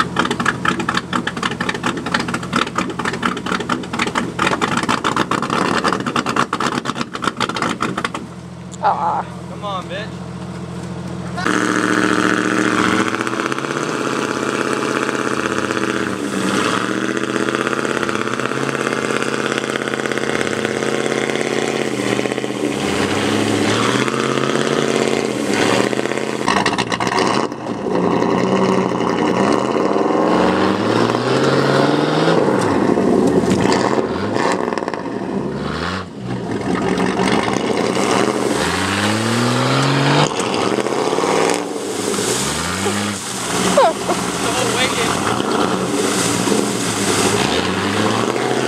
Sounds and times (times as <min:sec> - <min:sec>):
Outside, rural or natural: 0:00.0 - 0:48.6
Truck: 0:00.0 - 0:48.6.